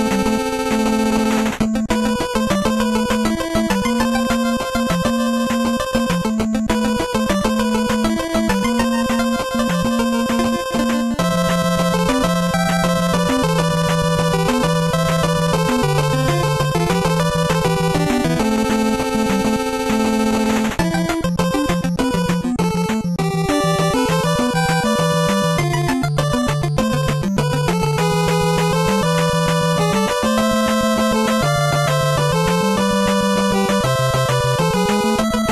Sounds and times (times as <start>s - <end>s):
Video game music: 0.0s - 35.5s.